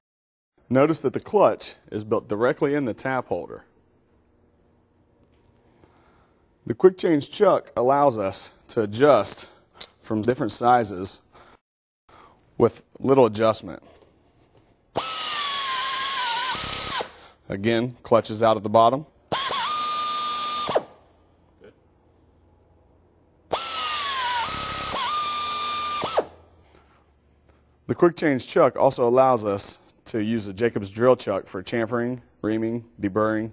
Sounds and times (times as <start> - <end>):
Speech: 0.7 - 3.7, 6.7 - 11.2, 12.6 - 13.9, 17.5 - 19.1, 27.9 - 33.5
Drill: 15.0 - 17.2, 19.3 - 21.0, 23.5 - 26.4.